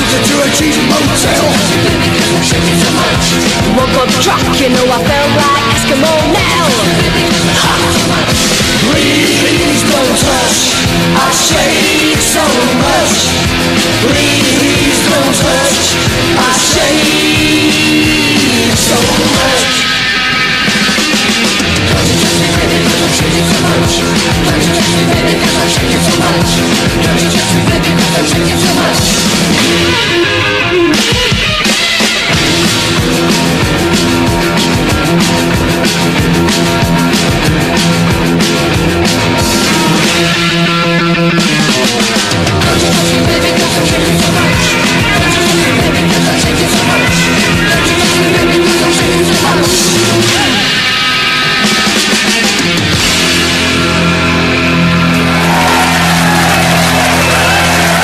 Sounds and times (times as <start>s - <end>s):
Singing: 0.0s - 20.2s, 20.8s - 30.1s, 41.8s - 52.8s
Punk rock: 0.0s - 58.0s.